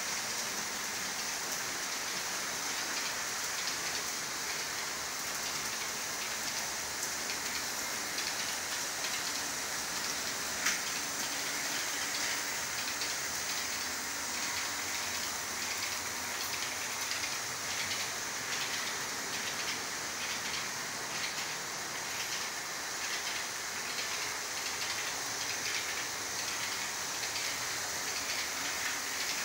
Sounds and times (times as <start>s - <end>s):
Train: 0.0s - 29.4s.